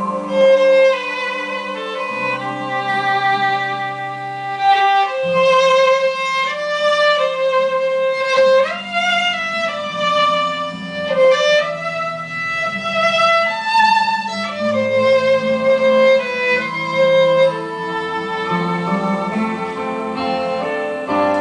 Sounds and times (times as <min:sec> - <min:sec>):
Violin, fiddle: 0:00.0 - 0:21.4.